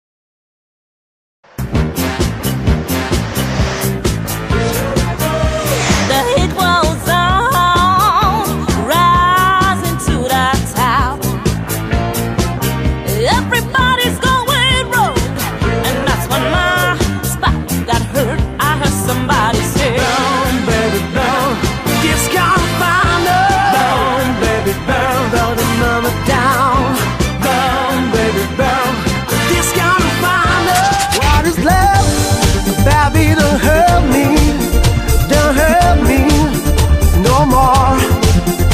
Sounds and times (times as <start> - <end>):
Pop music: 1.8 - 38.7.